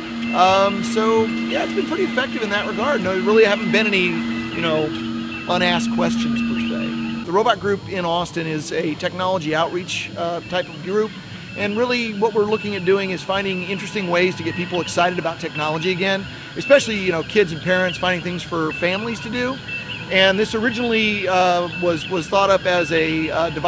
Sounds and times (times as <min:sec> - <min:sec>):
Speech: 0:00.4 - 0:23.6.